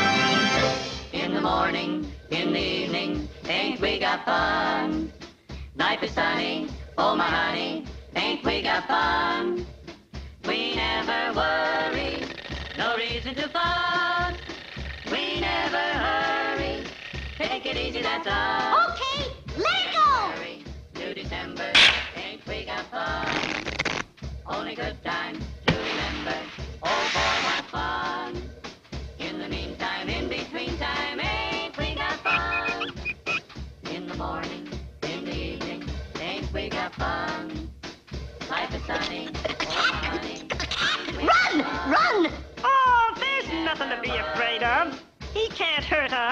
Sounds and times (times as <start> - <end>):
Music: 0.0 - 46.3
Speech: 18.8 - 20.4, 39.4 - 40.2, 40.8 - 46.3.